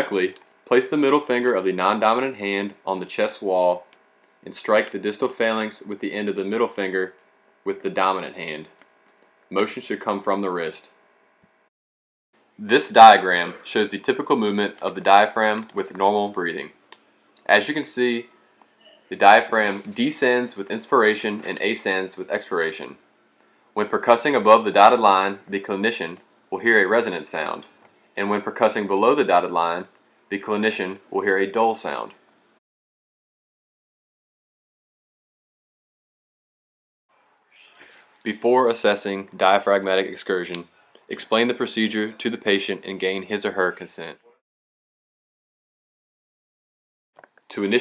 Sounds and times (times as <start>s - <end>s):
Speech: 0.0s - 7.1s, 7.7s - 8.8s, 9.5s - 10.9s, 12.6s - 16.8s, 17.4s - 18.3s, 19.1s - 23.0s, 23.8s - 32.2s, 37.7s - 44.4s, 47.5s - 47.8s.